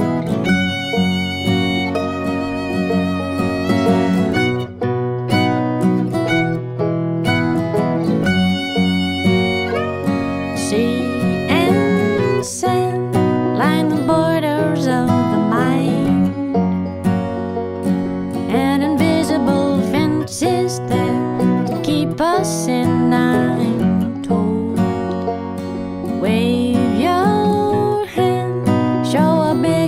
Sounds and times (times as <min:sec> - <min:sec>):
Music: 0:00.0 - 0:29.8.